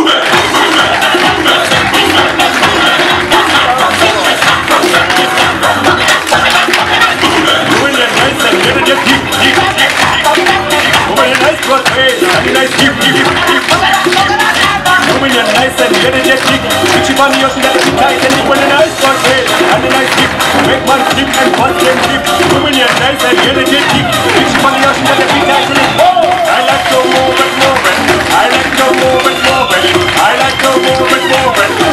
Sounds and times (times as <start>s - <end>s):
Music: 0.0s - 31.9s.